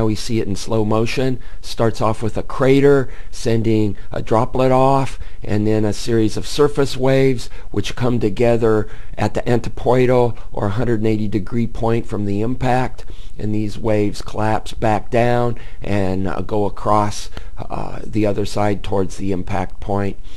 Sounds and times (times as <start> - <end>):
Speech: 0.0 - 20.2.